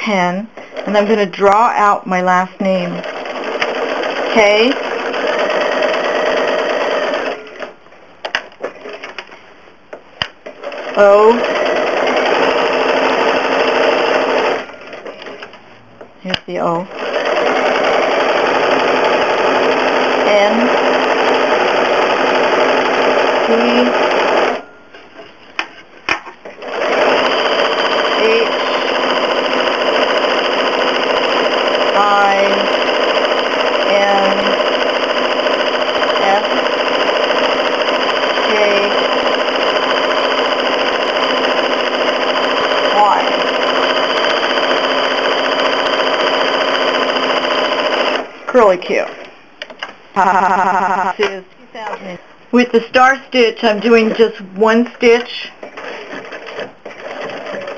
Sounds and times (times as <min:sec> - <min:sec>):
Sewing machine: 0:03.0 - 0:07.8, 0:10.5 - 0:15.4, 0:16.9 - 0:24.6, 0:26.6 - 0:48.3, 0:55.6 - 0:57.7.